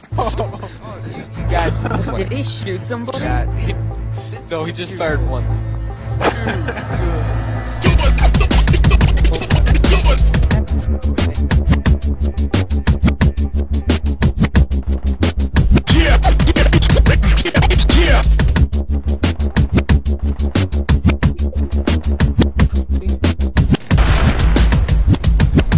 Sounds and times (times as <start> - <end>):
Drum and bass: 0.0 - 3.9, 5.1 - 25.7.